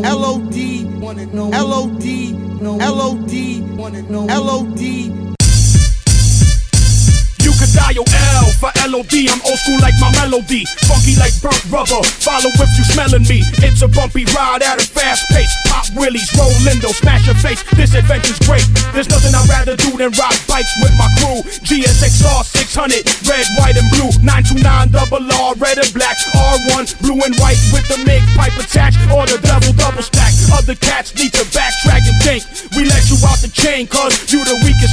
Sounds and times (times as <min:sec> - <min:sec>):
Music: 0:00.0 - 0:34.9.